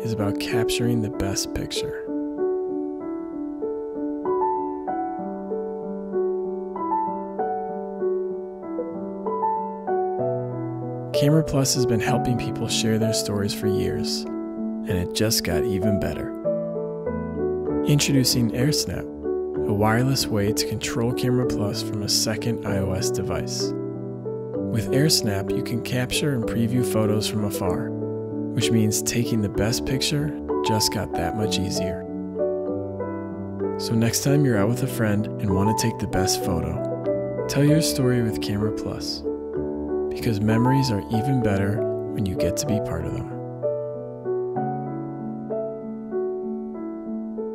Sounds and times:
Speech: 0.0 - 2.1, 11.2 - 14.3, 14.9 - 16.4, 17.9 - 23.7, 24.7 - 27.9, 28.6 - 32.1, 33.8 - 36.9, 37.5 - 39.2, 40.1 - 43.4
Music: 0.0 - 47.5.

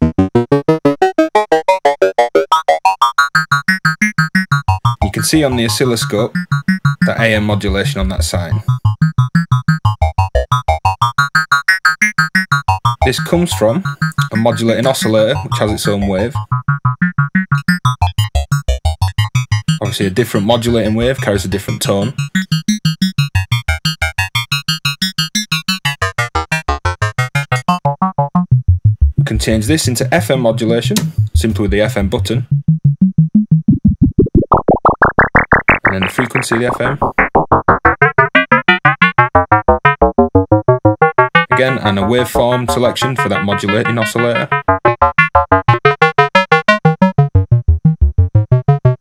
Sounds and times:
Synthesizer: 0.0 - 28.6, 33.7 - 47.3
Speech: 5.0 - 6.3, 7.1 - 8.7, 13.0 - 16.4, 19.8 - 22.2, 29.2 - 32.5, 35.9 - 37.0, 41.6 - 44.6.

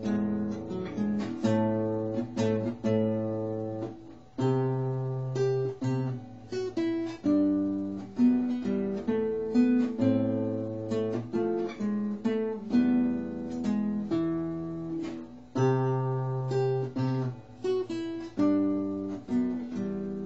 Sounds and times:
Guitar: 0.0 - 20.2.

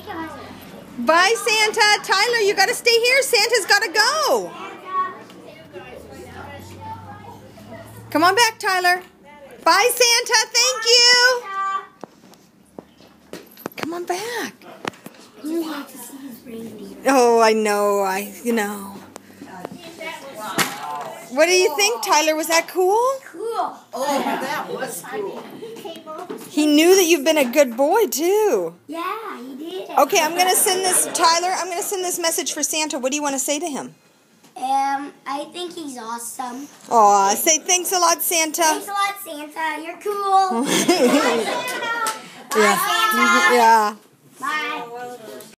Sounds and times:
Child speech, kid speaking: 0.0 - 8.1, 10.4 - 12.0, 15.4 - 17.1, 18.8 - 26.5, 28.8 - 31.2, 34.6 - 37.0, 38.6 - 45.5.

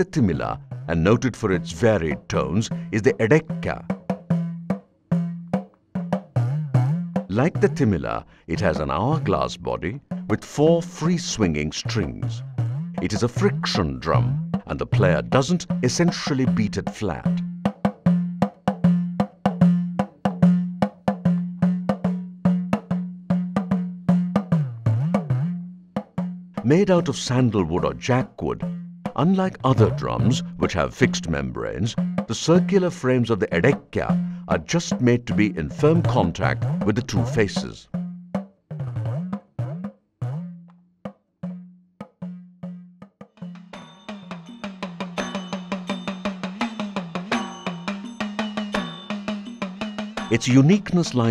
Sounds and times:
Percussion: 0.0 - 51.3.

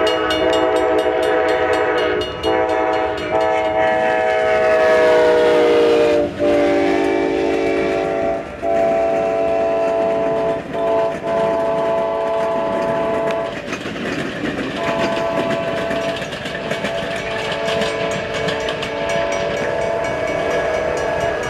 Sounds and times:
Clickety-clack: 0.0 - 5.4, 6.1 - 21.5
Train horn: 0.0 - 13.8, 14.7 - 21.5
Railroad car, train wagon: 0.0 - 21.5.

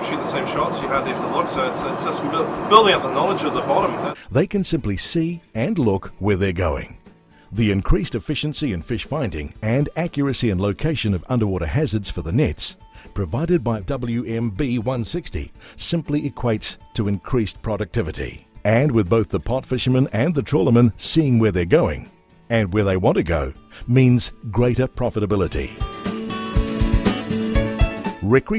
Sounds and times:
Speech: 0.0 - 25.8, 28.2 - 28.5
Music: 0.0 - 28.5.

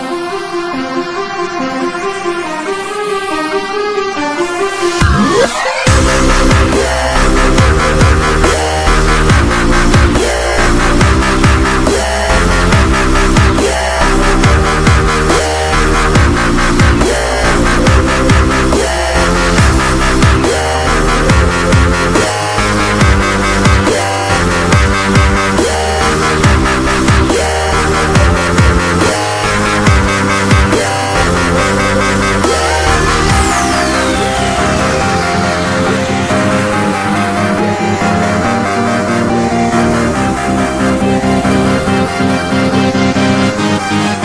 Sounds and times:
Dubstep: 0.0 - 44.2.

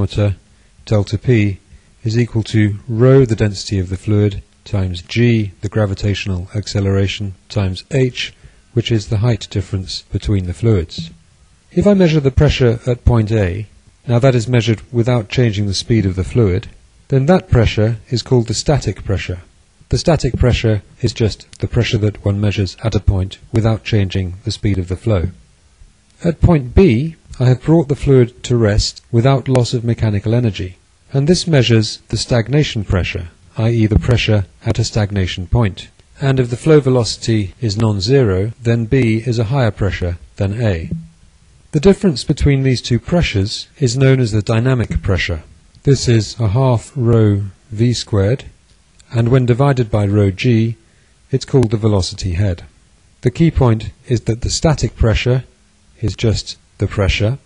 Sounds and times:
Speech: 0.0 - 25.4, 26.2 - 41.0, 41.7 - 57.4.

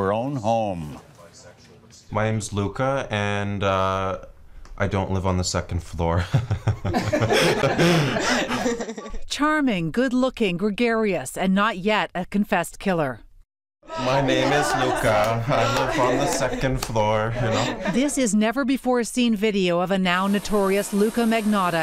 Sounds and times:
Speech: 0.0 - 6.2, 13.9 - 21.8.

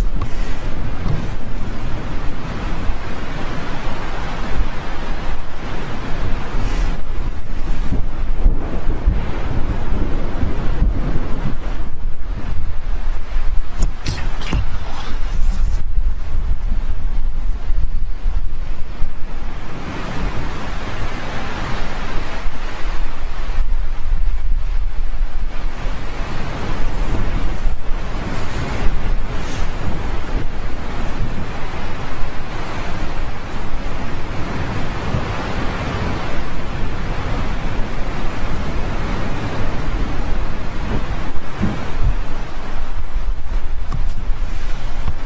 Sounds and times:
Eruption: 0.0 - 45.2.

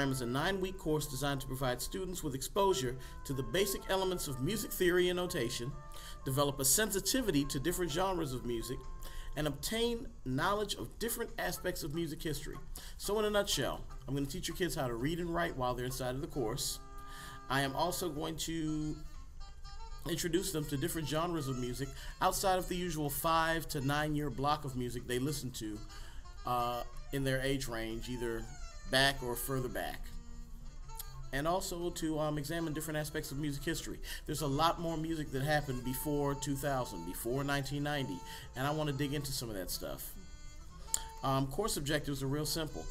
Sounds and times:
Speech: 0.0 - 8.8, 9.4 - 16.8, 17.5 - 19.1, 20.0 - 25.9, 26.5 - 30.1, 31.3 - 40.2, 41.2 - 42.9
Music: 0.0 - 42.9.

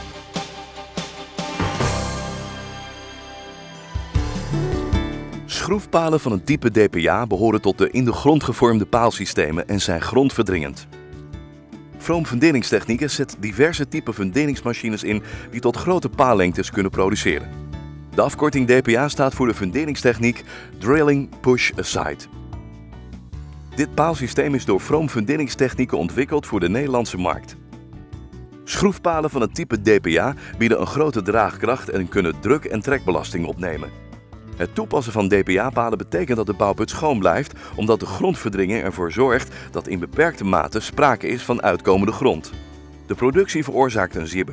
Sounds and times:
Music: 0.0 - 44.5
Speech: 5.5 - 10.9, 12.0 - 17.5, 18.2 - 22.3, 23.8 - 27.6, 28.7 - 33.9, 34.6 - 44.5.

